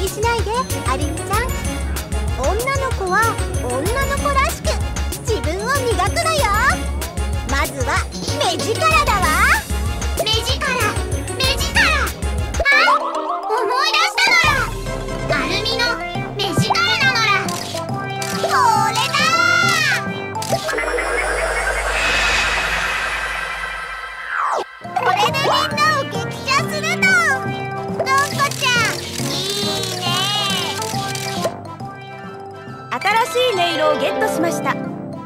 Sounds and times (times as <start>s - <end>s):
Sound effect: 18.4s - 25.8s.